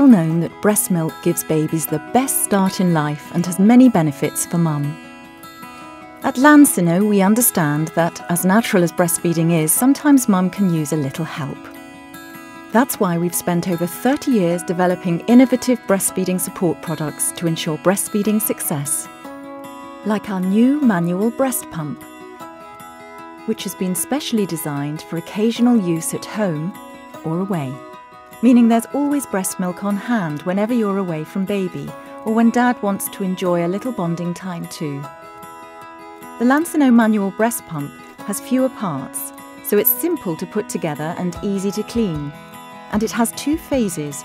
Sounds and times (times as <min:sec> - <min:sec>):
Speech: 0:00.0 - 0:05.0, 0:06.3 - 0:11.7, 0:12.8 - 0:19.1, 0:20.1 - 0:22.0, 0:23.5 - 0:27.8, 0:28.4 - 0:35.1, 0:36.4 - 0:42.3, 0:43.0 - 0:44.2
Music: 0:00.0 - 0:44.2.